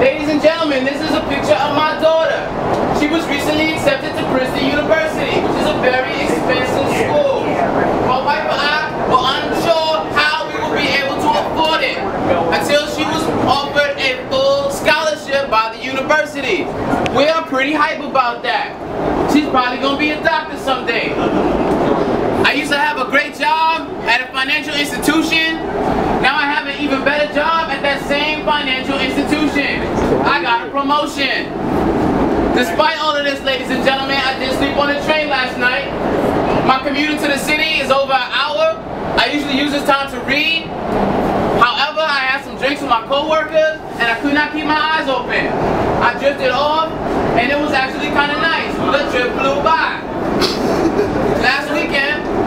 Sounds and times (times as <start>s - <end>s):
Speech: 0.0s - 21.4s, 22.4s - 31.5s, 32.5s - 40.7s, 41.6s - 50.1s, 51.3s - 52.4s
Train: 2.5s - 8.2s, 18.7s - 19.3s, 20.7s - 22.5s, 23.9s - 26.2s, 29.0s - 30.5s, 31.5s - 32.8s, 34.0s - 37.7s, 40.4s - 41.6s, 45.4s - 46.0s, 46.8s - 52.4s.